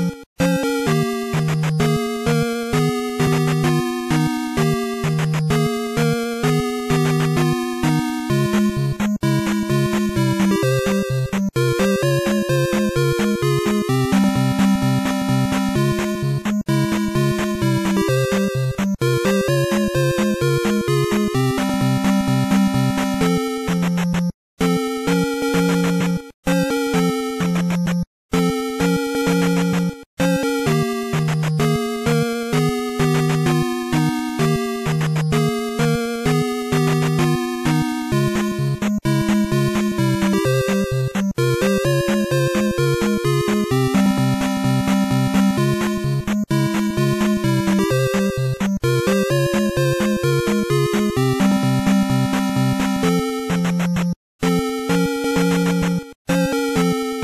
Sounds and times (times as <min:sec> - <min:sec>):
Rhythm and blues: 0:00.0 - 0:57.2.